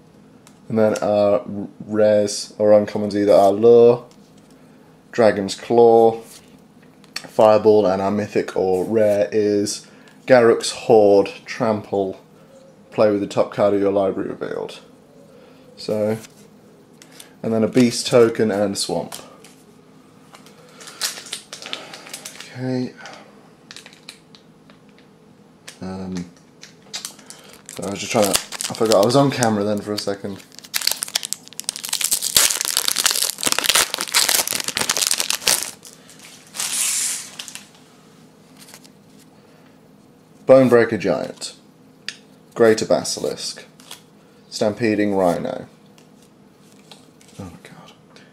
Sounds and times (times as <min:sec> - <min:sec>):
Speech: 0:00.7 - 0:04.1, 0:05.1 - 0:06.3, 0:07.3 - 0:12.2, 0:12.9 - 0:14.9, 0:15.8 - 0:16.3, 0:17.4 - 0:19.3, 0:22.4 - 0:23.2, 0:25.8 - 0:26.4, 0:27.8 - 0:30.4, 0:40.5 - 0:41.6, 0:42.6 - 0:43.7, 0:44.5 - 0:45.7, 0:47.4 - 0:48.0.